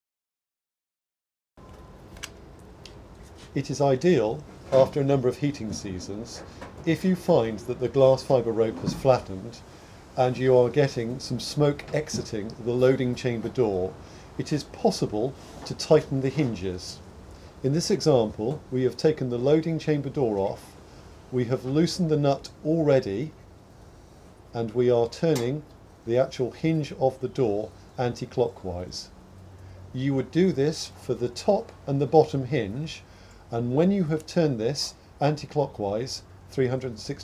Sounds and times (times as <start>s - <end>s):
Speech: 3.6s - 9.6s, 10.2s - 17.0s, 17.6s - 23.4s, 24.6s - 29.1s, 29.9s - 37.2s.